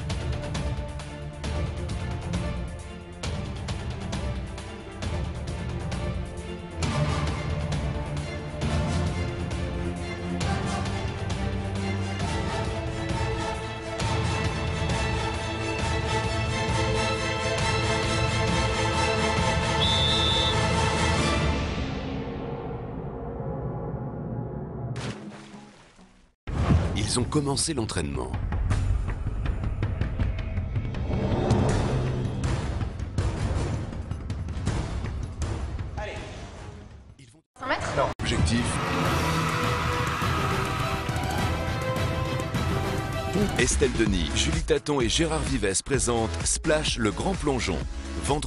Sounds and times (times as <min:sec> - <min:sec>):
Music: 0:00.0 - 0:48.4
Speech: 0:26.9 - 0:28.4, 0:37.2 - 0:38.8, 0:43.4 - 0:48.4.